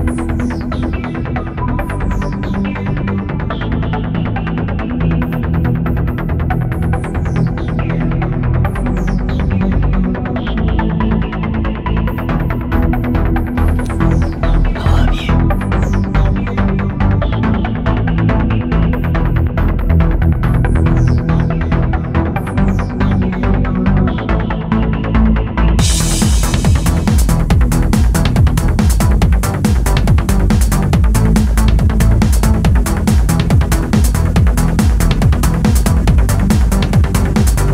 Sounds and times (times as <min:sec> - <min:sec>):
Music: 0:00.0 - 0:37.7.